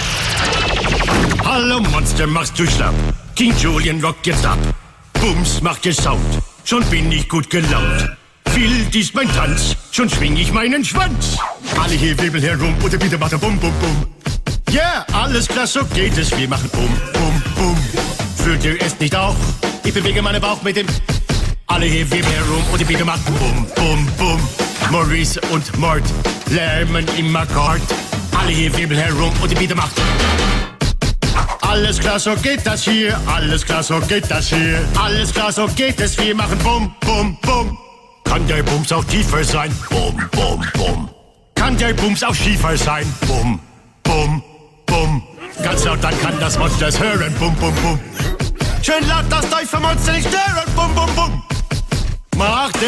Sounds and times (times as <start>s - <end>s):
Music: 0.0s - 52.8s.